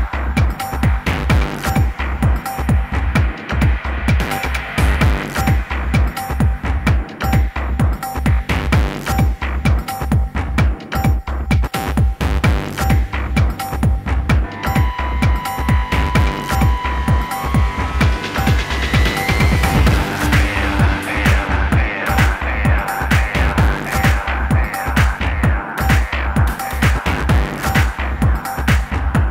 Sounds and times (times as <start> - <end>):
Techno: 0.0 - 29.3.